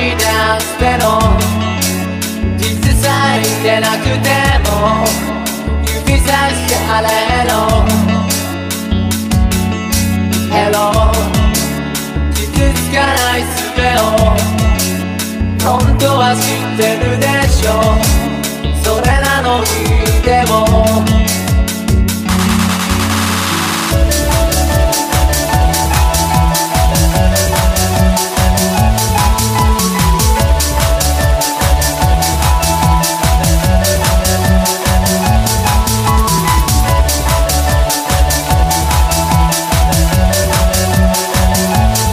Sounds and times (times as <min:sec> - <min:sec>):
Soundtrack music: 0:00.0 - 0:42.1
Techno: 0:00.0 - 0:42.1.